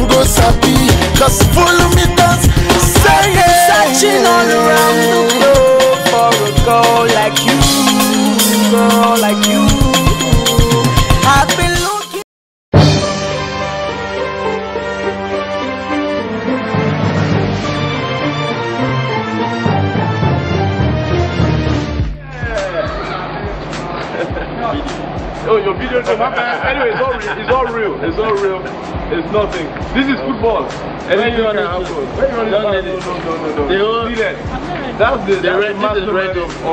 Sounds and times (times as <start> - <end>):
Music: 0.0 - 12.2, 12.8 - 36.7
Laughter: 24.0 - 24.9, 26.0 - 27.8
Speech: 25.5 - 36.7.